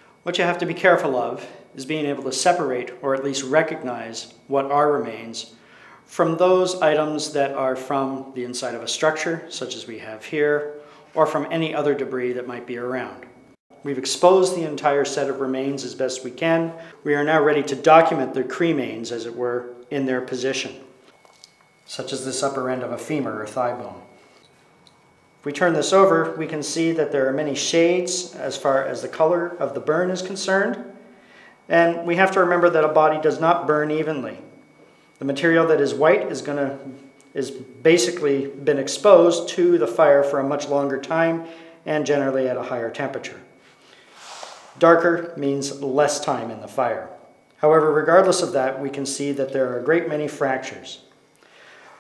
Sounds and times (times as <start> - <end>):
Inside, small room: 0.0 - 52.0
Speech: 0.2 - 20.9, 21.9 - 24.1, 25.4 - 30.9, 31.7 - 34.5, 35.2 - 43.6, 44.8 - 51.1.